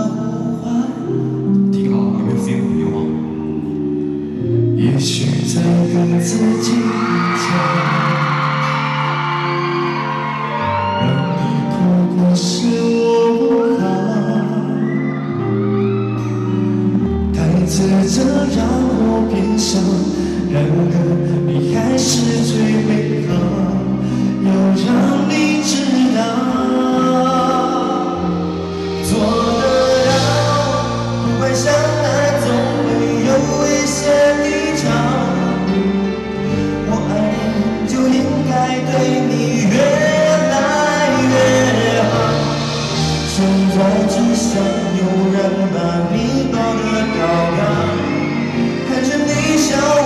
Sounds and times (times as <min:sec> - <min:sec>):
Male singing: 0:00.0 - 0:03.0, 0:04.8 - 0:08.9, 0:11.0 - 0:15.1, 0:17.2 - 0:36.2, 0:36.8 - 0:50.0
Music: 0:00.0 - 0:50.0.